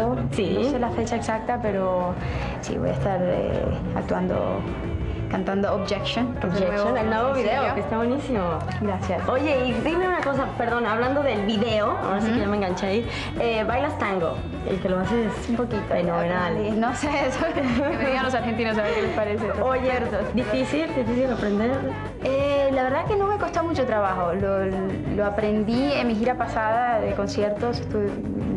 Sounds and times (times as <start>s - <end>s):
Music: 0.0s - 28.5s.